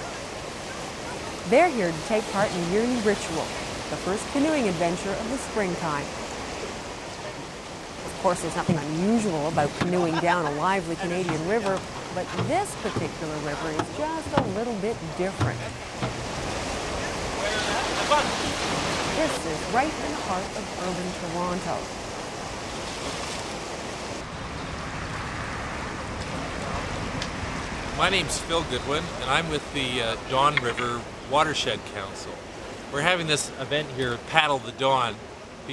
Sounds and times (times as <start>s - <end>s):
Rowboat, canoe, kayak: 0.0s - 35.7s
Speech: 1.5s - 6.1s, 8.1s - 15.7s, 19.2s - 21.8s, 28.0s - 32.4s, 33.0s - 35.7s.